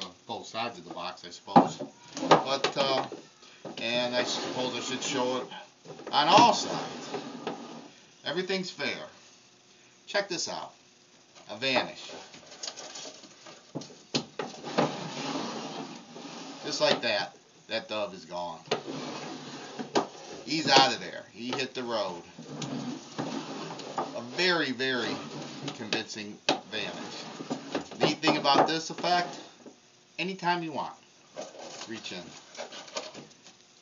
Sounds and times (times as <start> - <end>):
Speech: 0.0 - 1.8, 2.5 - 3.1, 3.8 - 6.9, 8.2 - 9.2, 10.1 - 10.8, 11.5 - 12.2, 16.7 - 18.7, 20.5 - 22.3, 24.2 - 27.2, 28.0 - 29.5, 30.2 - 31.0, 31.8 - 32.4.